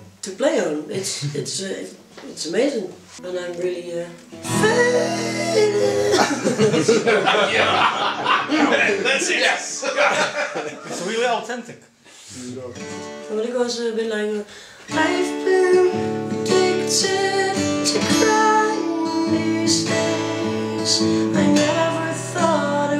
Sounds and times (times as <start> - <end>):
Speech: 0.0 - 4.2, 6.8 - 14.4
Music: 3.0 - 8.5, 12.8 - 13.5, 14.9 - 22.9.